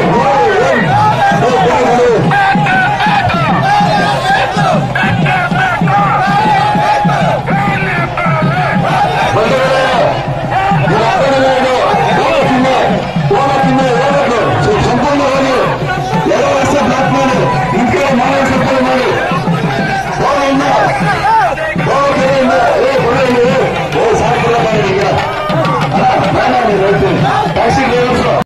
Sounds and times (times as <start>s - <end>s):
Music: 0.0s - 28.4s
Speech: 0.0s - 28.4s.